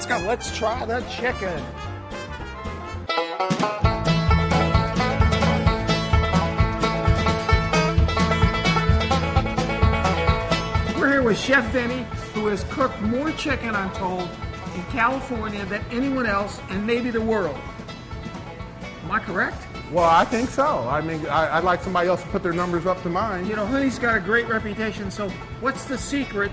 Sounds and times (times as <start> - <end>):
Music: 0.0 - 26.5.